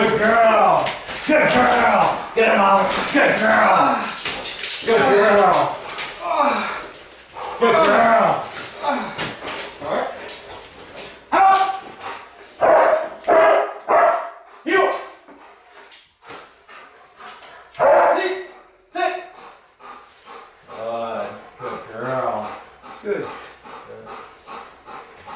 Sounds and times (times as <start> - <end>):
Speech: 4.8 - 6.7, 18.1 - 19.2.